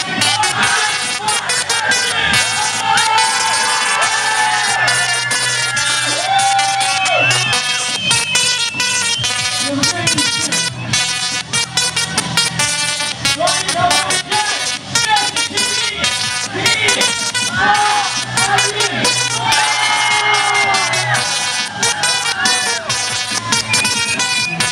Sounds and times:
Music: 0:00.0 - 0:24.7.

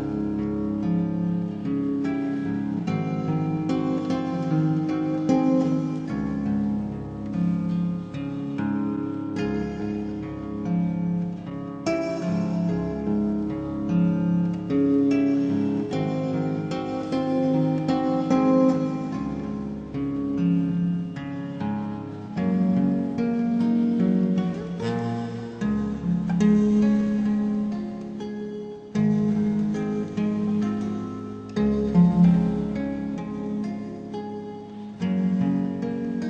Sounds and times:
Music: 0:00.0 - 0:36.3.

